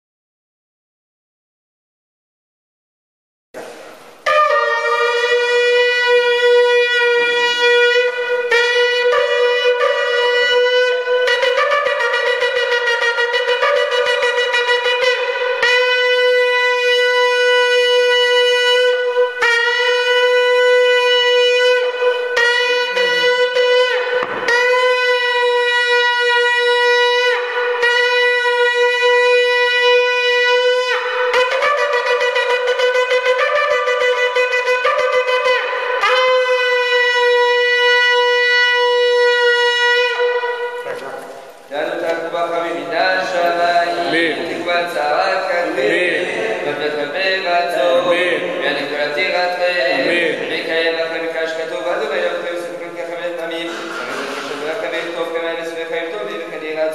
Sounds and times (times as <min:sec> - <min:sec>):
Wind instrument, woodwind instrument: 0:03.6 - 0:41.7, 0:42.9 - 0:46.6, 0:47.7 - 0:50.4
Shofar: 0:04.2 - 0:41.5.